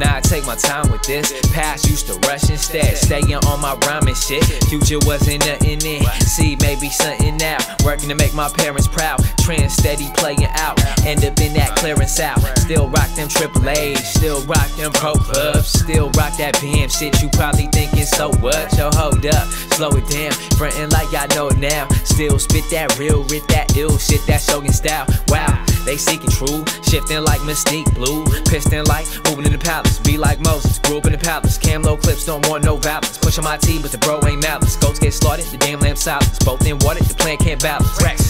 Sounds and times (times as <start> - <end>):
Rhythm and blues: 0.0 - 38.2.